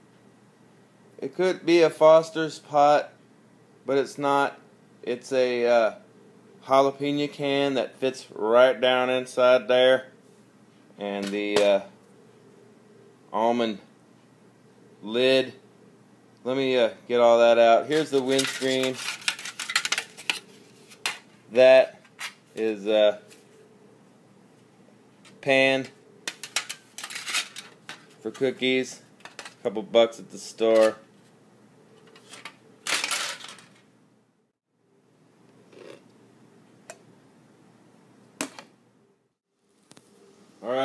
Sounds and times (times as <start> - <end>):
Inside, small room: 0.0 - 40.8
Speech: 1.2 - 3.2, 3.9 - 6.0, 6.6 - 10.1, 11.0 - 11.9, 13.3 - 13.9, 15.0 - 15.6, 16.4 - 19.0, 21.5 - 21.9, 22.6 - 23.2, 25.4 - 26.0, 28.2 - 29.0, 29.6 - 31.0, 40.6 - 40.8.